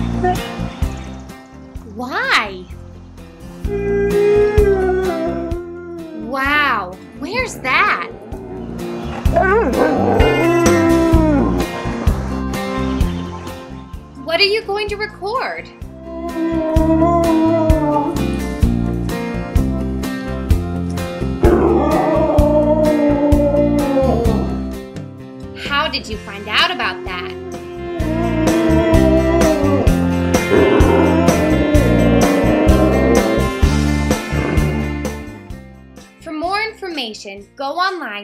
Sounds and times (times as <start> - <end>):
Music: 0.0 - 38.2
Speech: 6.3 - 8.2, 25.6 - 27.4, 36.2 - 38.2.